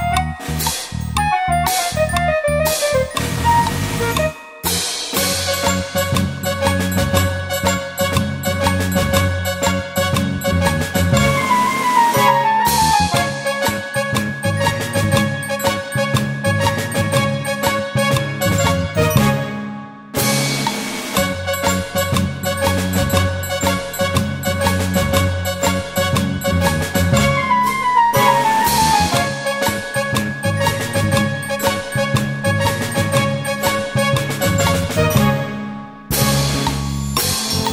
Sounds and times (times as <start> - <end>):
Theme music: 0.0 - 37.7.